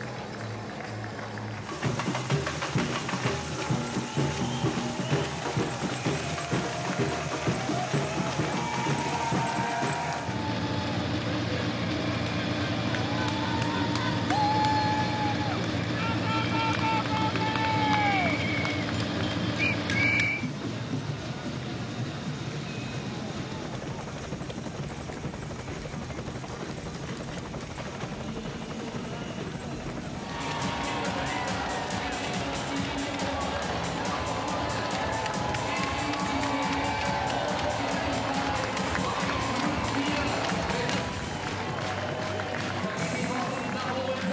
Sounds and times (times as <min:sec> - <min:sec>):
Music: 0:00.0 - 0:44.3
Outside, urban or manmade: 0:00.0 - 0:44.3
Run: 0:00.0 - 0:44.3.